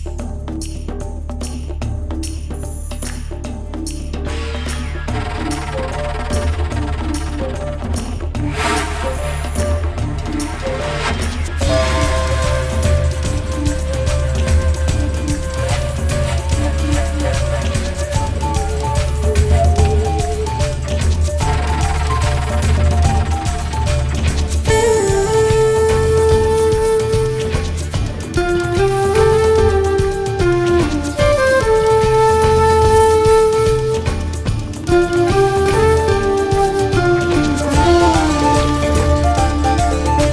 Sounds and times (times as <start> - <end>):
Music: 0.0 - 40.3.